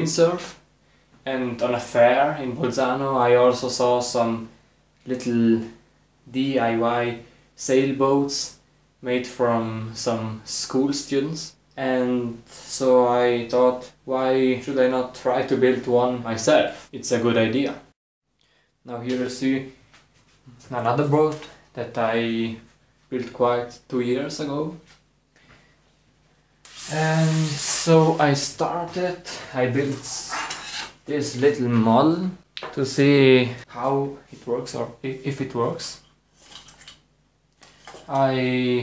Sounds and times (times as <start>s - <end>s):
Speech: 0.0s - 0.6s, 1.2s - 18.0s, 18.8s - 19.8s, 20.5s - 24.9s, 26.9s - 36.1s, 38.1s - 38.8s.